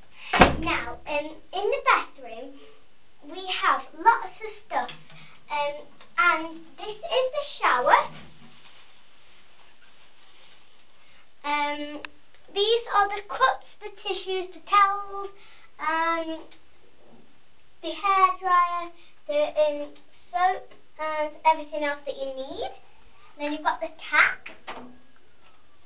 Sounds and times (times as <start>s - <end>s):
Speech: 0.6s - 2.6s, 3.2s - 8.2s, 11.4s - 16.6s, 17.8s - 22.8s, 23.4s - 24.5s.